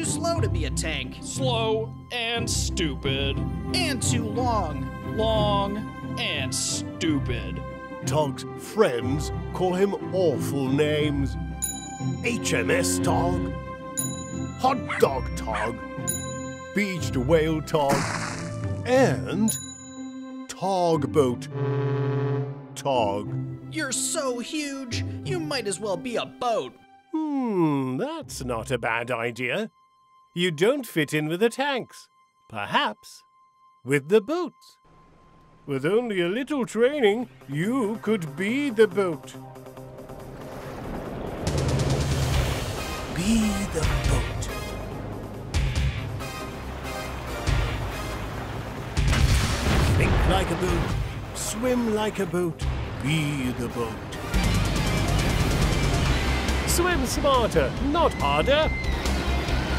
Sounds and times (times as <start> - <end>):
Speech: 0.0 - 11.4, 12.3 - 13.5, 14.6 - 15.8, 16.8 - 18.0, 18.9 - 19.5, 20.5 - 21.5, 22.8 - 29.7, 30.4 - 33.2, 33.9 - 34.8, 35.7 - 39.4, 43.2 - 44.6, 50.0 - 54.1, 56.7 - 58.7
Music: 0.0 - 59.7.